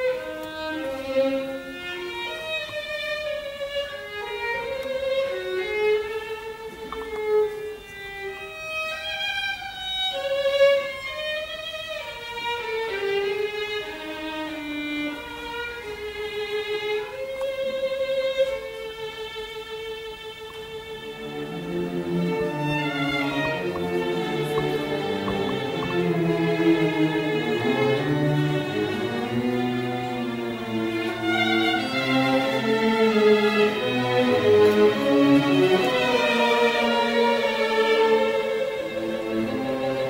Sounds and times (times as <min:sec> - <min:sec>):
Violin, fiddle: 0:00.0 - 0:40.0.